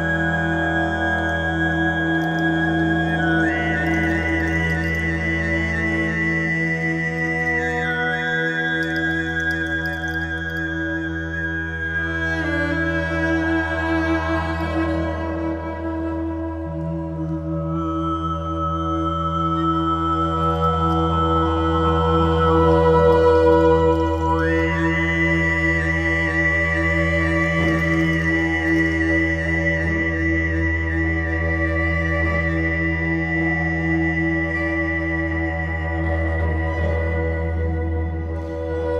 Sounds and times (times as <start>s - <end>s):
Cello: 0.0s - 38.9s.